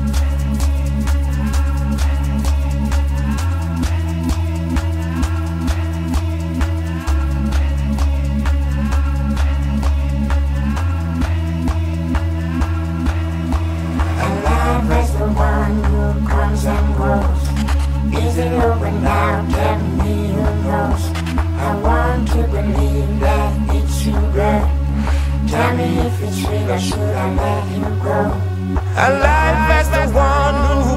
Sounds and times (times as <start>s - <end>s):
Music: 0.0s - 30.9s.